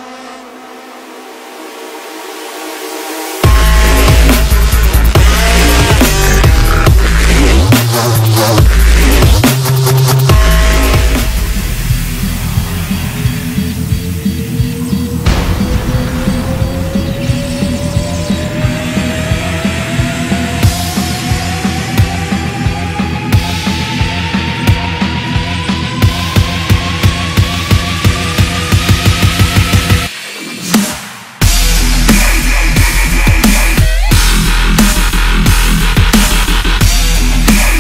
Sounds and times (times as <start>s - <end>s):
Dubstep: 1.4s - 37.8s.